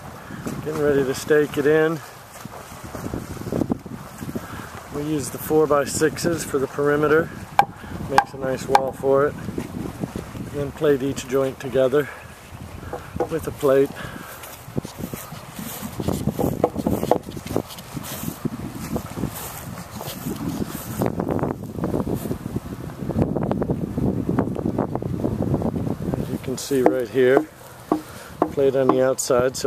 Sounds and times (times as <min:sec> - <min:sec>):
Speech: 0:00.6 - 0:02.0, 0:04.9 - 0:07.3, 0:08.1 - 0:09.4, 0:10.5 - 0:12.2, 0:13.2 - 0:14.0, 0:26.4 - 0:27.5, 0:28.5 - 0:29.6.